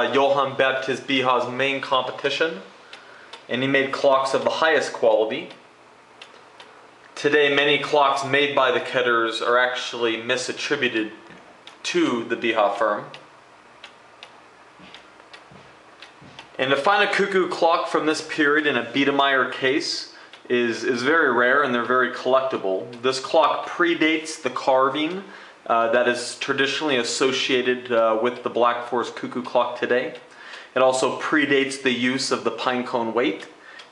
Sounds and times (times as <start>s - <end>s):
Speech: 0.0s - 2.8s, 3.5s - 5.6s, 7.2s - 13.2s, 16.6s - 33.6s
Tick-tock: 13.1s - 17.2s, 29.2s - 30.7s.